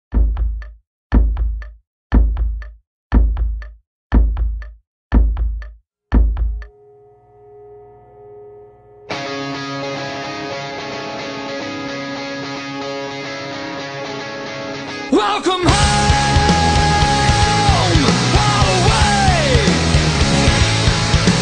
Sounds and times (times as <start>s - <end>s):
Music: 8.7s - 21.4s.